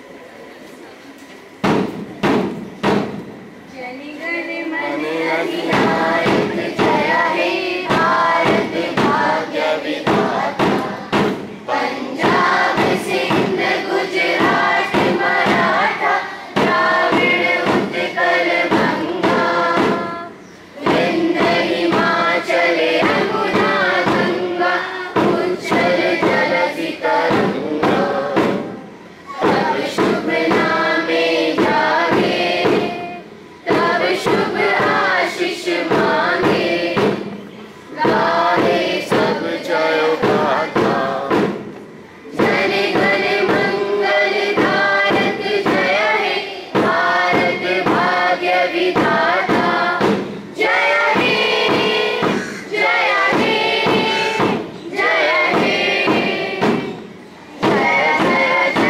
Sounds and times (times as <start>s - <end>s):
Thump, thud: 1.6s - 3.3s, 5.6s - 11.5s, 12.2s - 15.8s, 16.6s - 20.1s, 20.8s - 22.2s, 25.2s - 26.6s, 27.2s - 28.7s, 29.4s - 30.8s, 31.5s - 33.0s, 33.7s - 35.1s, 35.8s - 37.4s, 38.0s - 39.5s, 40.2s - 41.8s, 44.5s - 46.0s, 46.8s - 48.2s, 48.9s - 52.5s, 53.3s - 58.9s
Choir: 3.7s - 58.9s.